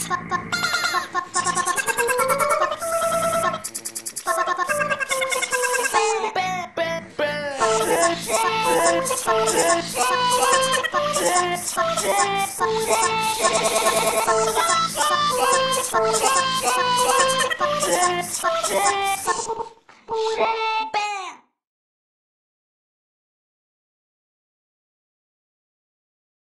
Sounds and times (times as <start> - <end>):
Music: 1.5 - 3.7, 7.6 - 19.2.